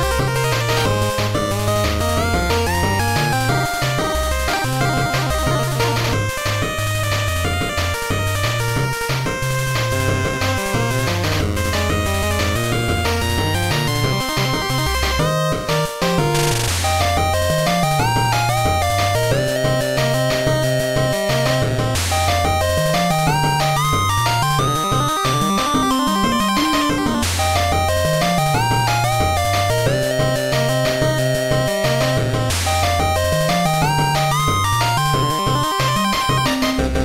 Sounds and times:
Music: 0.0 - 37.0.

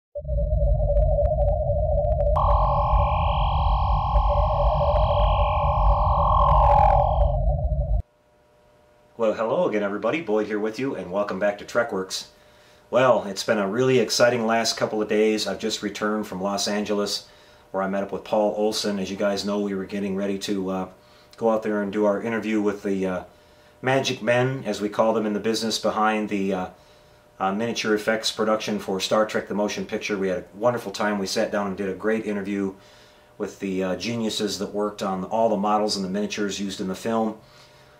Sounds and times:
Inside, small room: 2.3 - 37.9
Speech: 9.2 - 12.3, 12.9 - 26.8, 27.4 - 32.8, 33.4 - 37.4.

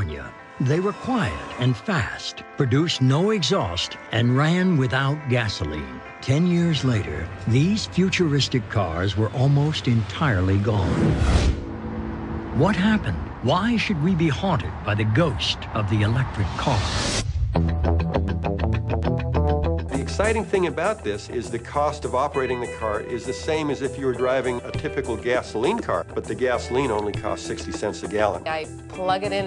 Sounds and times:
Music: 0.0 - 29.4
Speech: 12.6 - 16.9, 20.0 - 29.4.

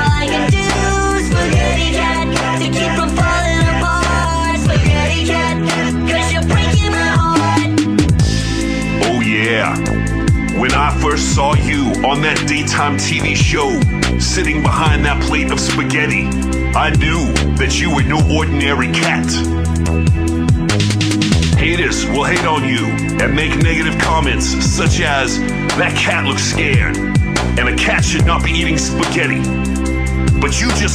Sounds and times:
Music: 0.0 - 30.9
Speech: 9.0 - 9.9, 10.6 - 19.5, 21.6 - 27.0, 27.6 - 29.5, 30.4 - 30.9.

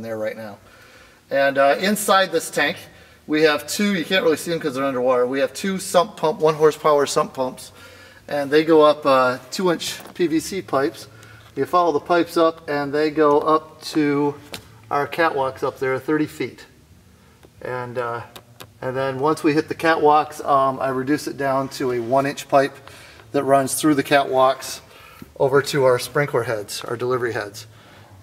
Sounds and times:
Speech: 0.0 - 0.6, 1.3 - 16.8, 17.6 - 27.7.

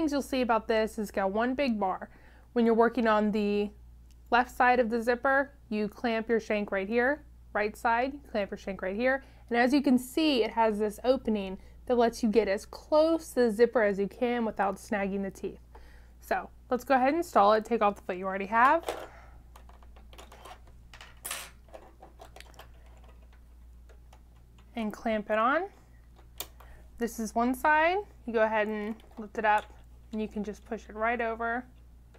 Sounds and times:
Speech: 0.0 - 15.6, 16.2 - 18.8, 24.8 - 25.8, 27.0 - 31.7.

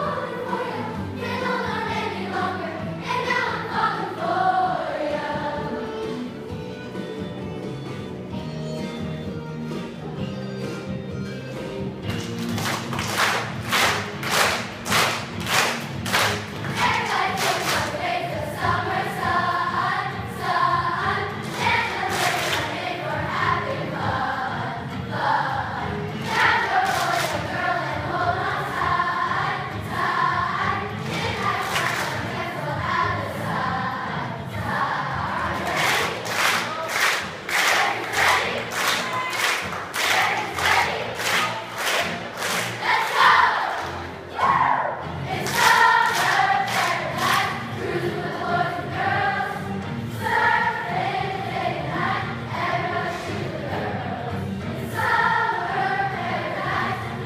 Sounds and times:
Choir: 0.0 - 6.6, 13.1 - 57.2.

